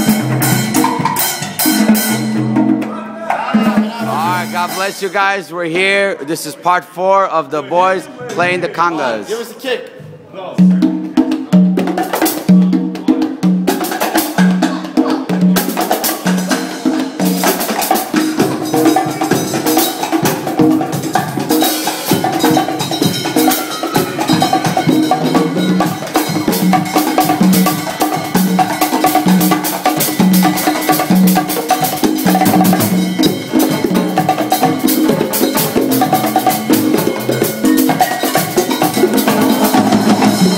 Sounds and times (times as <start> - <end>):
Drum: 0.0 - 6.0, 10.0 - 40.5
Inside, large room or hall: 0.0 - 40.5
Speech: 3.2 - 10.8.